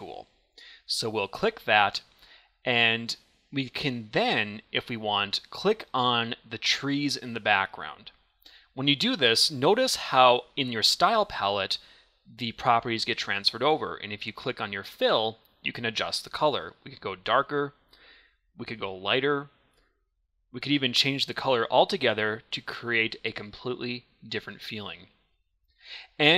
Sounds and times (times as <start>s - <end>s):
Speech: 0.0s - 2.1s, 2.7s - 8.2s, 8.8s - 17.8s, 18.6s - 19.5s, 20.6s - 25.1s, 26.1s - 26.3s.